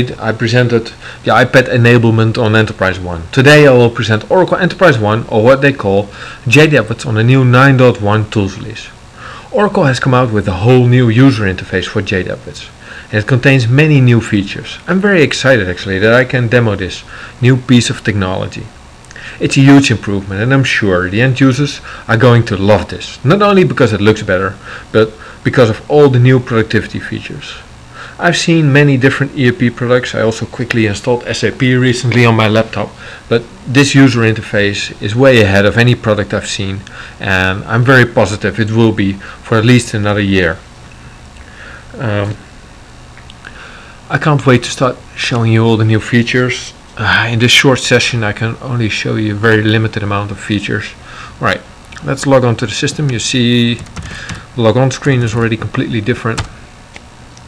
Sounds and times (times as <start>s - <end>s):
Speech: 0.0s - 40.7s, 41.9s - 42.4s, 44.1s - 56.6s.